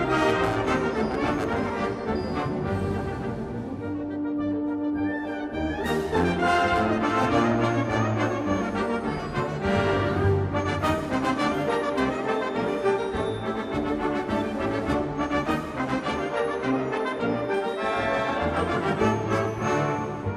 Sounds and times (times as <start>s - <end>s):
Music: 0.0s - 20.3s.